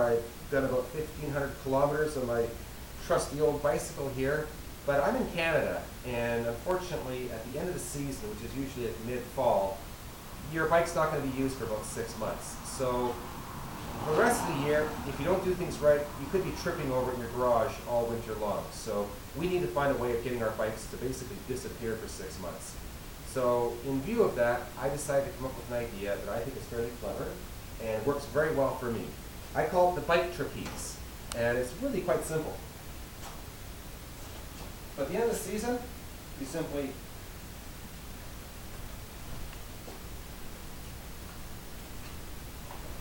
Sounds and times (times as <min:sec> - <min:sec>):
Speech: 0:00.0 - 0:09.8, 0:10.4 - 0:13.2, 0:14.0 - 0:32.7, 0:35.0 - 0:37.0.